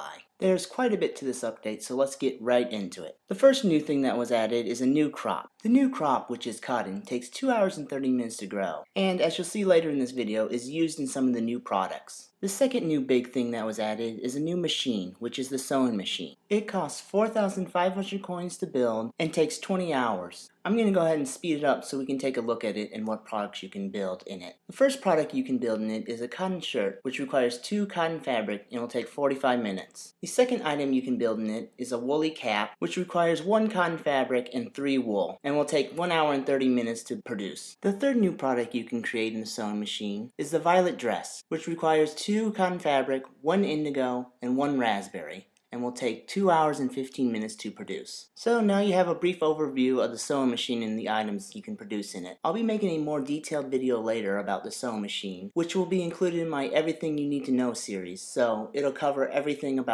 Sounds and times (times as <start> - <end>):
Speech: 0.0 - 59.9.